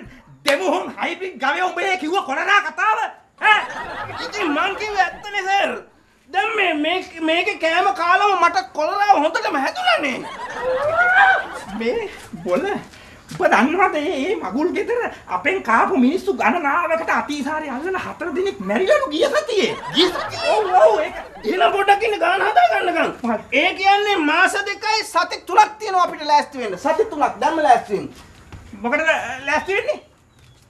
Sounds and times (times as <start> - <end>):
Speech: 0.0 - 10.3, 11.6 - 30.1
Snicker: 3.4 - 5.7, 10.0 - 12.9, 19.3 - 22.4.